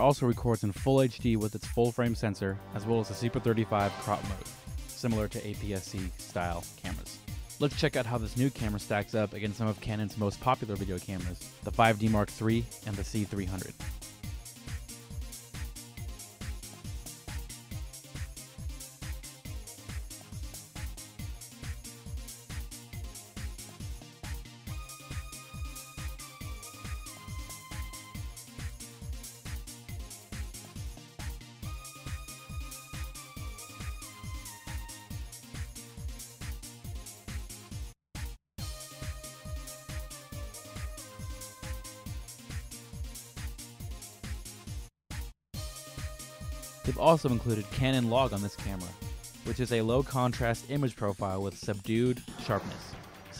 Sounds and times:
Speech: 0.0s - 13.8s, 46.8s - 53.4s
Music: 0.0s - 53.4s.

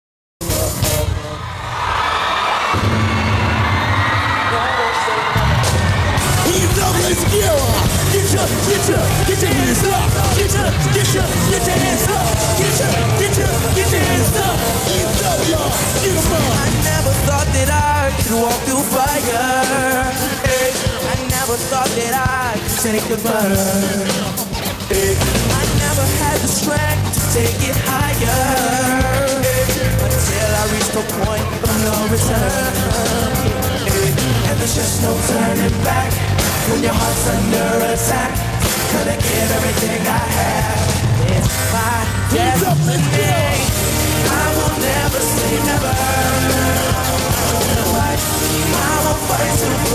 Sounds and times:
Angry music: 0.4s - 49.9s
Independent music: 0.4s - 49.9s
Rhythm and blues: 0.4s - 49.9s
Blues: 2.3s - 49.9s.

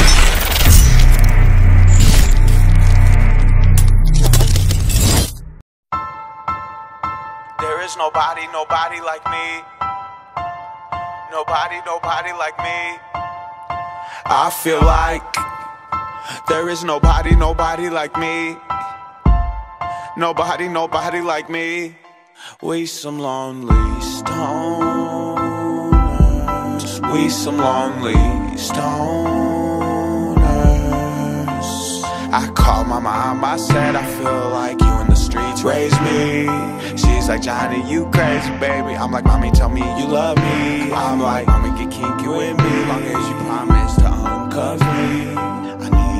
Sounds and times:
Music: 0.0s - 46.1s.

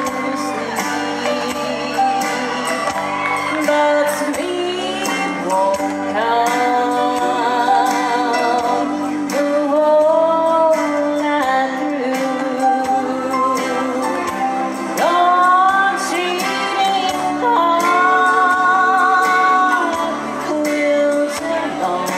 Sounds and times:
Female singing: 0.0s - 22.1s
Music: 0.0s - 22.1s.

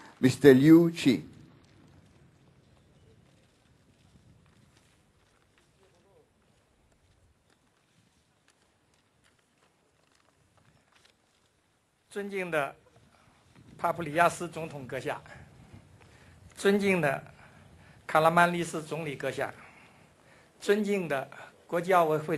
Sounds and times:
Narration, monologue: 0.0s - 2.5s, 12.0s - 22.3s
Male speech, man speaking: 0.2s - 1.3s, 5.8s - 6.3s, 12.1s - 12.8s, 13.8s - 15.4s, 16.6s - 17.3s, 18.1s - 19.6s, 20.6s - 22.3s.

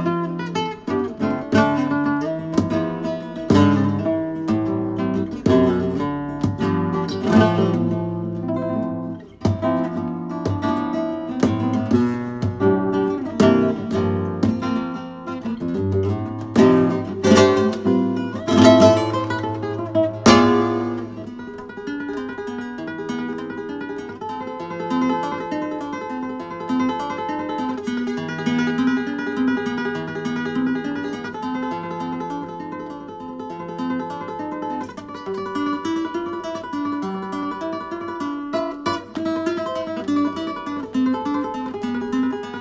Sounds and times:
Acoustic guitar: 0.0s - 42.6s
Mandolin: 0.0s - 42.6s.

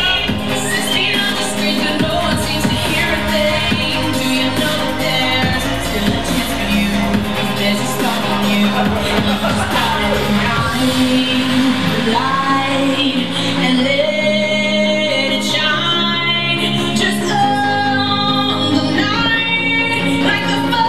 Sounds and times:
Dubstep: 0.0s - 20.8s.

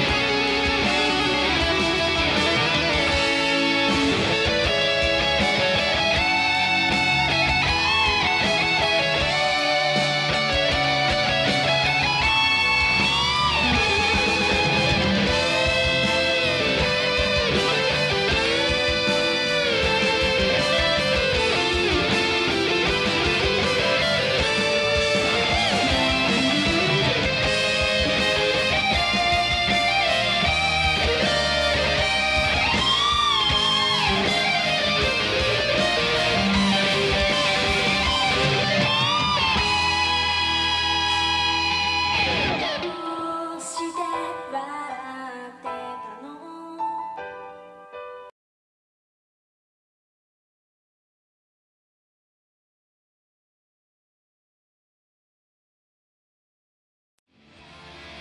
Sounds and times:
Music: 0.0s - 48.4s, 57.3s - 58.2s.

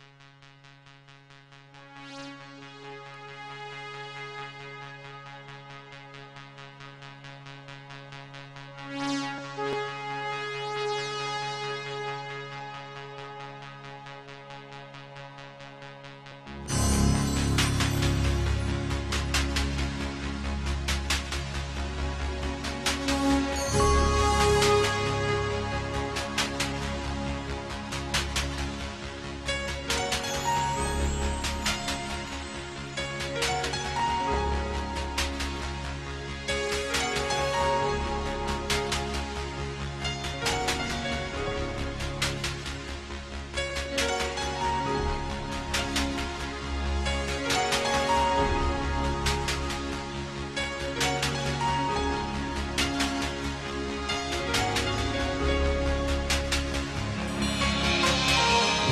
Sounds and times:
Music: 0.0s - 58.9s.

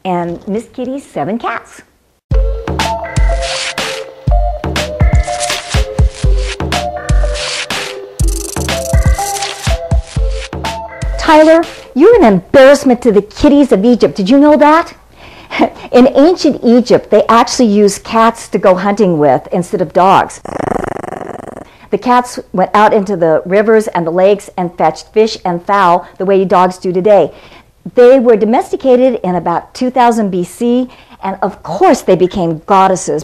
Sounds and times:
Speech: 0.0s - 1.9s, 11.2s - 15.0s, 15.9s - 20.4s, 21.9s - 27.3s, 27.9s - 33.2s
Music: 2.3s - 12.4s.

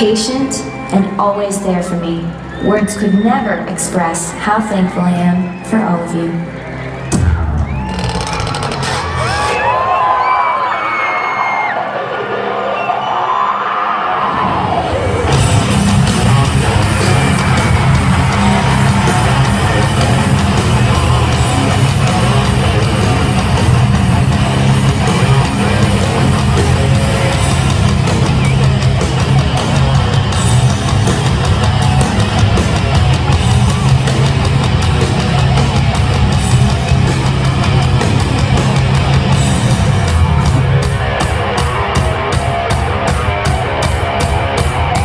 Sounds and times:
Female speech, woman speaking: 0.0s - 6.4s
Music: 0.0s - 45.0s.

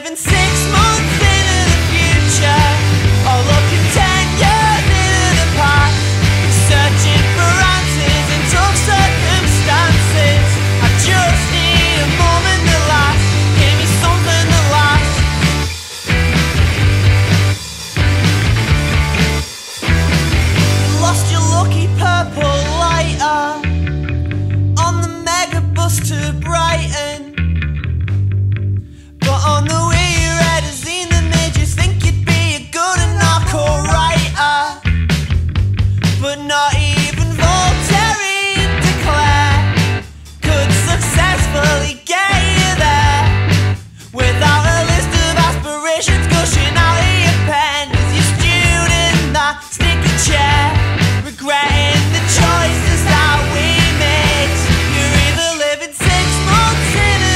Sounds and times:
Music: 0.0s - 57.3s.

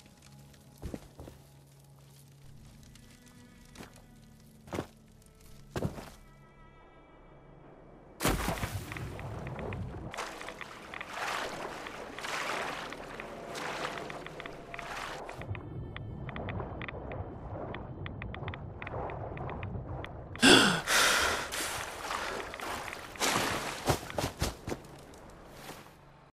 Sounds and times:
Gurgling: 20.0s - 24.0s.

